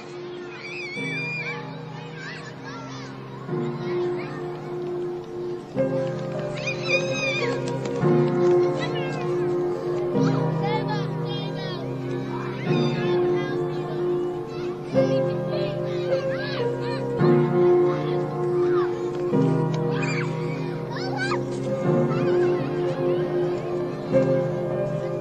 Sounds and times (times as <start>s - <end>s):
Music: 0.0s - 25.2s
Child speech, kid speaking: 0.3s - 5.1s, 6.5s - 7.7s, 8.4s - 25.2s.